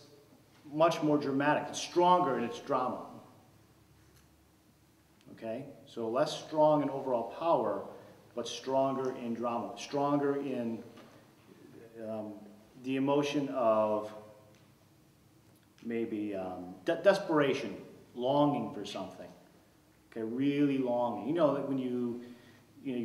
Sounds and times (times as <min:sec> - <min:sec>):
Speech: 0:00.6 - 0:03.2, 0:05.3 - 0:10.9, 0:11.7 - 0:14.2, 0:15.8 - 0:19.4, 0:20.2 - 0:22.2, 0:22.8 - 0:23.0.